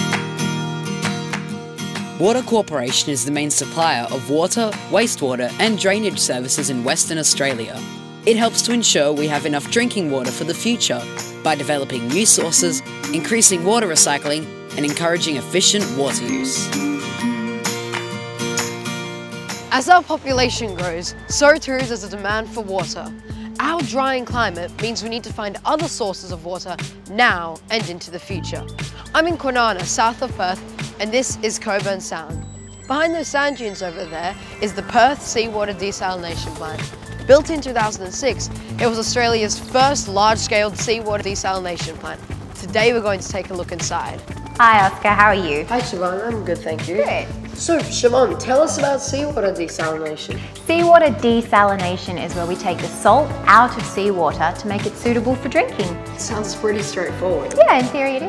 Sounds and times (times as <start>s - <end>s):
Music: 0.0s - 58.2s
Speech: 2.2s - 16.6s, 19.7s - 28.6s, 29.2s - 58.2s.